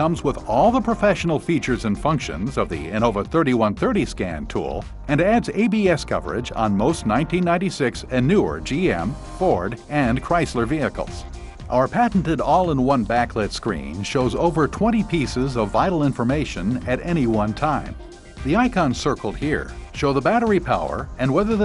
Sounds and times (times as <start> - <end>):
Music: 0.0 - 21.6
Speech: 0.0 - 21.6.